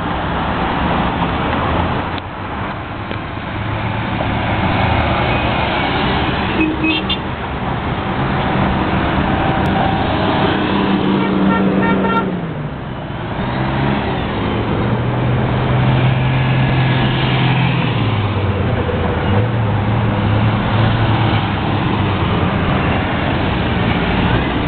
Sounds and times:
Bus: 0:00.0 - 0:24.6
Car: 0:00.0 - 0:24.6.

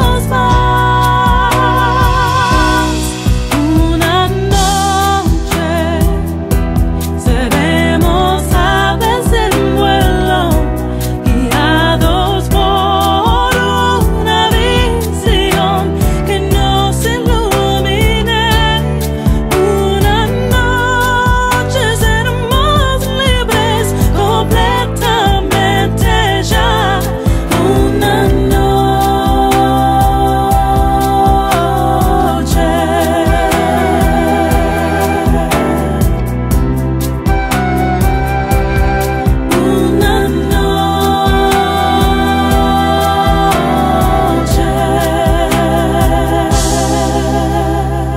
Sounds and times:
Christian music: 0:00.0 - 0:48.1.

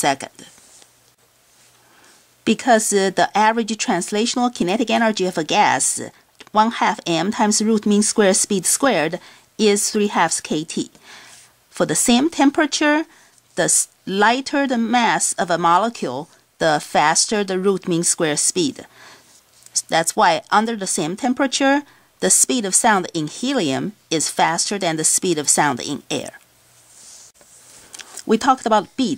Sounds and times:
Speech: 0:00.0 - 0:00.5, 0:02.4 - 0:11.0, 0:11.8 - 0:18.9, 0:19.7 - 0:26.4, 0:28.2 - 0:29.1.

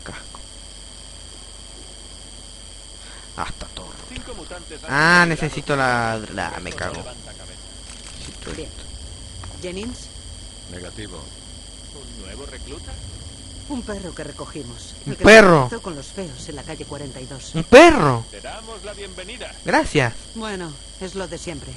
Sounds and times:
Speech: 0:03.4 - 0:07.6, 0:12.0 - 0:13.0, 0:13.7 - 0:21.7.

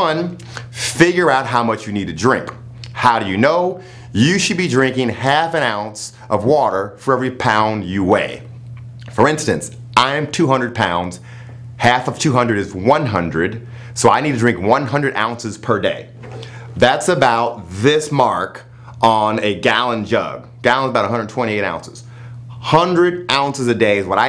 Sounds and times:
Speech: 0:00.0 - 0:08.5, 0:09.1 - 0:11.2, 0:11.8 - 0:16.2, 0:16.8 - 0:24.2.

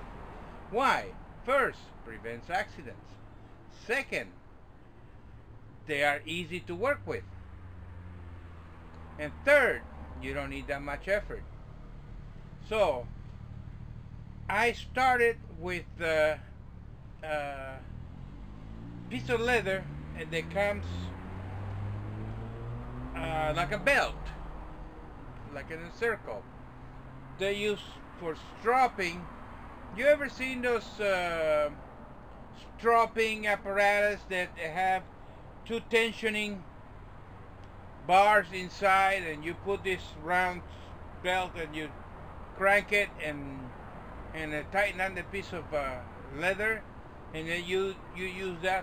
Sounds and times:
Speech: 0:00.8 - 0:03.1, 0:03.8 - 0:04.4, 0:05.9 - 0:07.2, 0:09.2 - 0:11.4, 0:12.6 - 0:13.1, 0:14.5 - 0:16.4, 0:17.2 - 0:17.8, 0:19.1 - 0:21.1, 0:23.2 - 0:24.4, 0:25.4 - 0:26.4, 0:27.4 - 0:29.3, 0:29.9 - 0:31.8, 0:32.6 - 0:35.0, 0:35.7 - 0:36.6, 0:38.0 - 0:40.6, 0:41.2 - 0:41.9, 0:42.6 - 0:43.7, 0:44.4 - 0:46.8, 0:47.4 - 0:48.8.

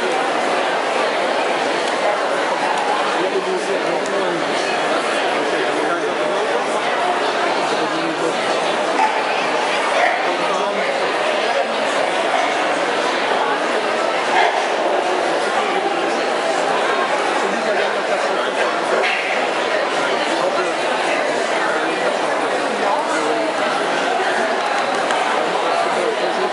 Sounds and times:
Speech: 0:00.0 - 0:26.5
Dog: 0:09.0 - 0:09.3.

